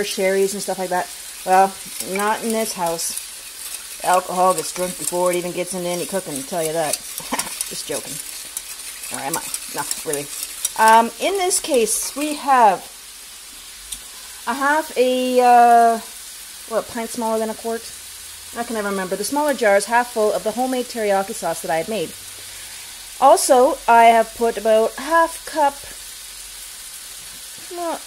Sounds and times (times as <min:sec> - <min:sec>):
Stir: 0:00.4 - 0:12.4.